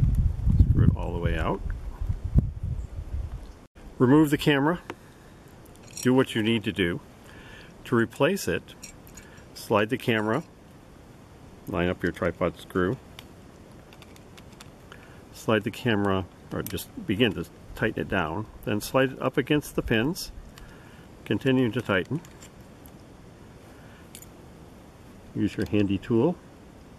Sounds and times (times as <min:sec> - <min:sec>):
Speech: 0:00.8 - 0:01.6, 0:04.0 - 0:04.9, 0:06.0 - 0:07.1, 0:07.8 - 0:08.8, 0:09.6 - 0:10.5, 0:11.7 - 0:13.0, 0:15.3 - 0:20.4, 0:21.3 - 0:22.3, 0:25.4 - 0:26.4.